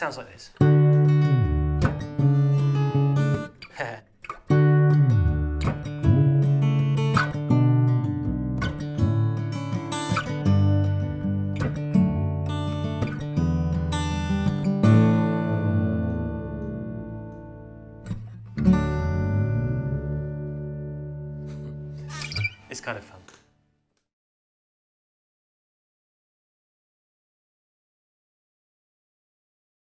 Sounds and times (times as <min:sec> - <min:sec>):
Music: 0:00.6 - 0:23.6.